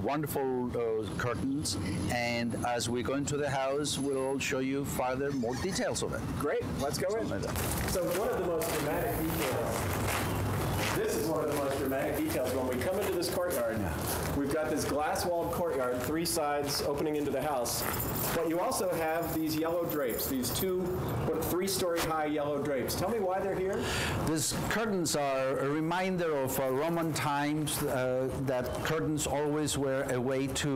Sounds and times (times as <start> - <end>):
Speech: 0.0 - 9.9, 10.8 - 30.7.